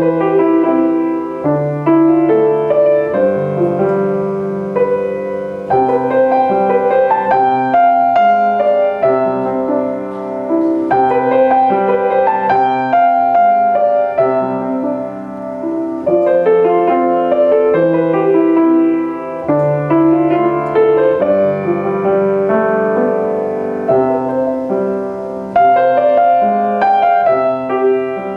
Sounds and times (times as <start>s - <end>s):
Music: 0.0s - 28.3s.